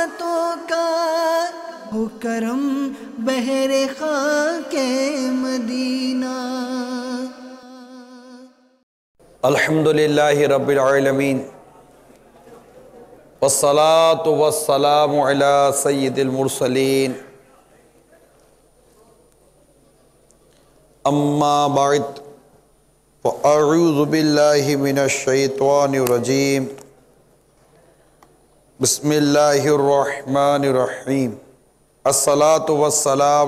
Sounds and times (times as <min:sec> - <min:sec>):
Male speech, man speaking: 0:09.4 - 0:19.3, 0:21.0 - 0:22.4, 0:23.2 - 0:26.8, 0:28.8 - 0:31.5, 0:32.1 - 0:33.4.